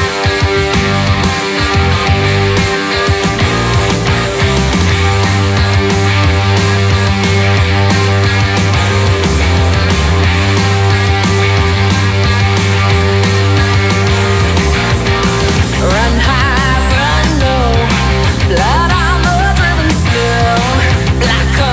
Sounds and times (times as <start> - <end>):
Music: 0.0 - 21.7.